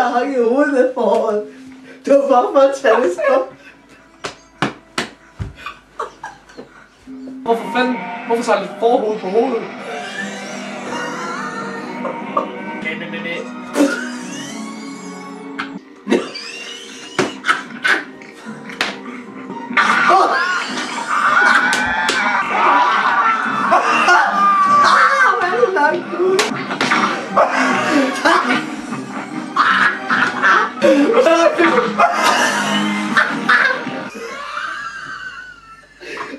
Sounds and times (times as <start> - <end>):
Music: 0.0 - 36.3
Speech: 2.1 - 3.5, 7.4 - 9.7
Bleat: 7.8 - 8.8.